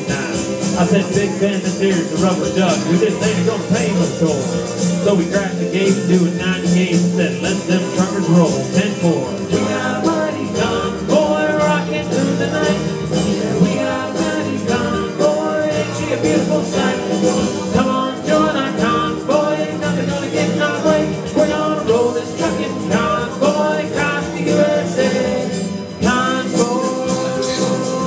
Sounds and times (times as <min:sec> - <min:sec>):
Music: 0:00.0 - 0:28.0
Singing: 0:05.1 - 0:28.0.